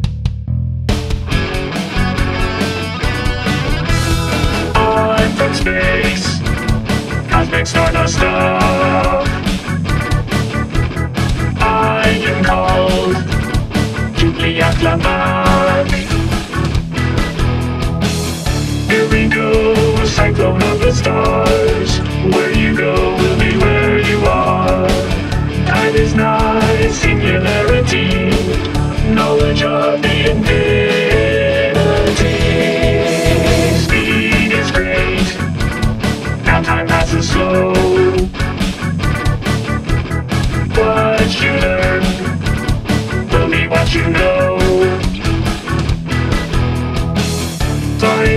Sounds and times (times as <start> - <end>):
Music: 0.0 - 48.3.